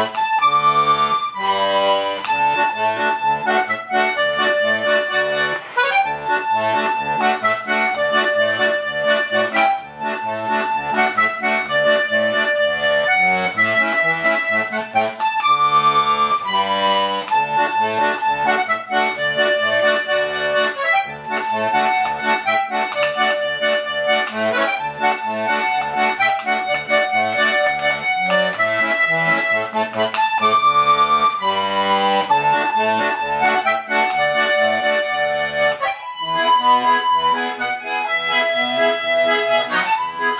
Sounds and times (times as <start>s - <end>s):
Music: 0.0s - 40.3s.